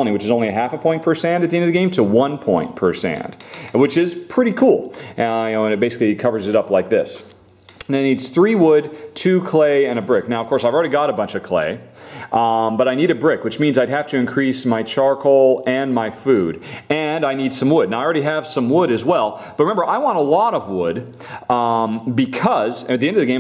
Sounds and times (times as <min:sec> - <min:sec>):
Speech: 0:00.0 - 0:23.4.